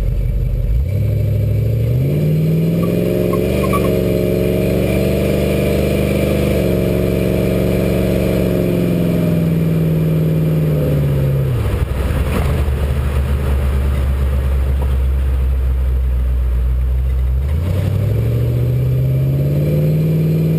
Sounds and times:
Car: 0.0 - 20.5
Accelerating, revving, vroom: 0.8 - 13.2, 17.4 - 20.5.

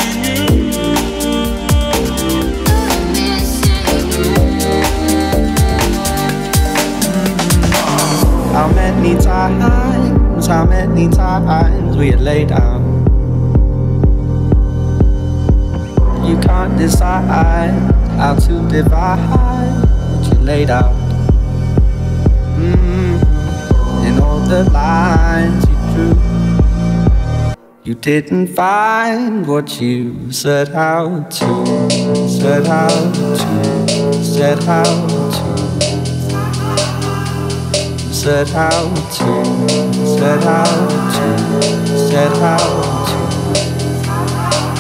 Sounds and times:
Music: 0.0 - 30.6, 31.3 - 44.8.

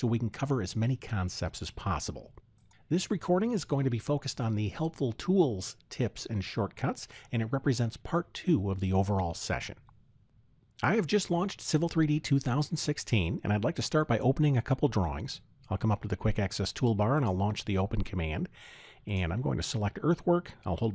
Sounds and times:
Speech: 0.0 - 9.8, 10.8 - 20.9.

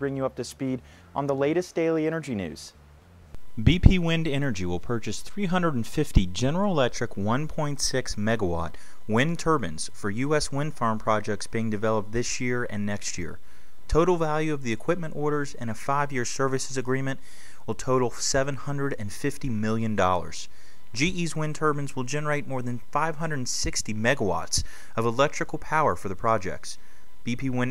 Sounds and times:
Speech: 0.0 - 2.8, 3.6 - 27.7.

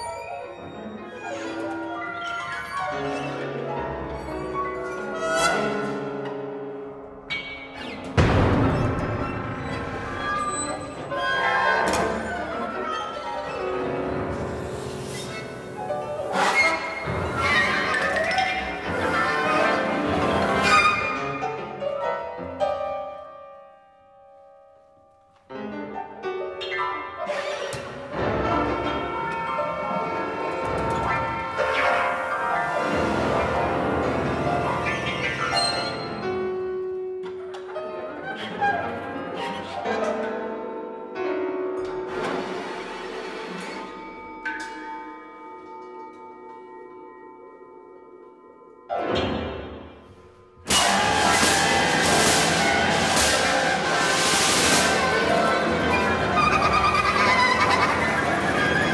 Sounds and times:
Cello: 0.0 - 23.1, 25.5 - 46.2, 50.7 - 58.9.

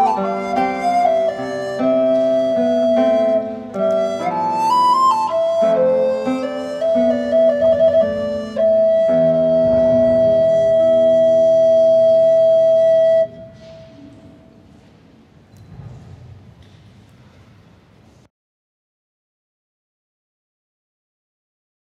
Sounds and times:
Guitar: 0.0 - 13.8
Flute: 0.0 - 14.6
Inside, large room or hall: 0.0 - 18.3.

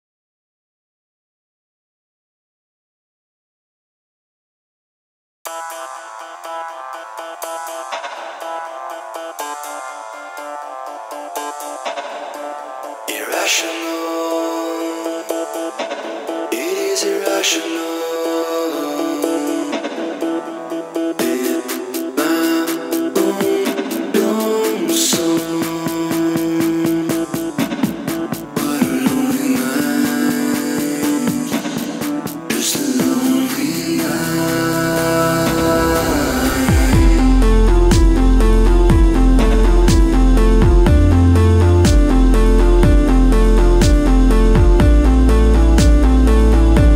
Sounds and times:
Music: 5.5 - 46.9.

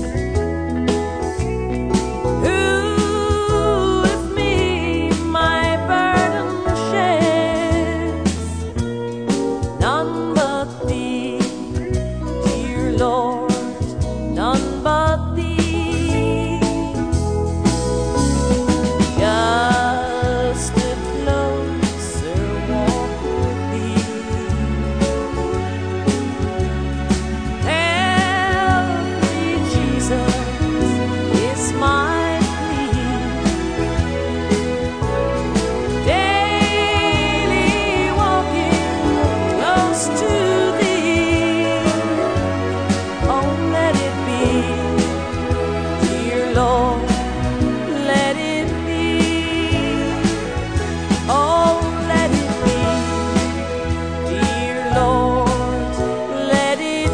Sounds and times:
Christmas music: 0.0 - 57.1.

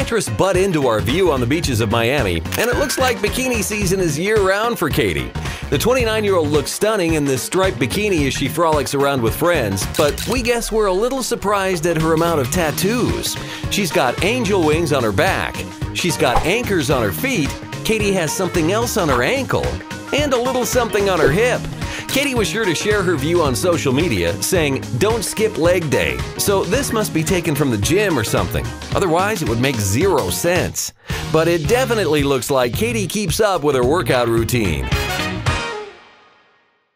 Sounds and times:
Speech: 0.0 - 35.0
Music: 0.0 - 36.9.

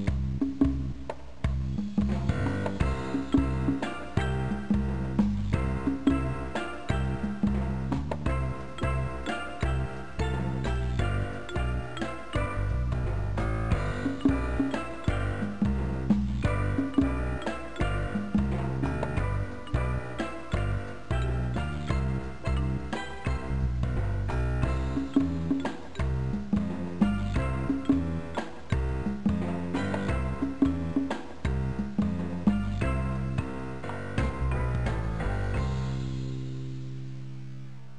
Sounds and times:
Music: 0.0 - 37.9.

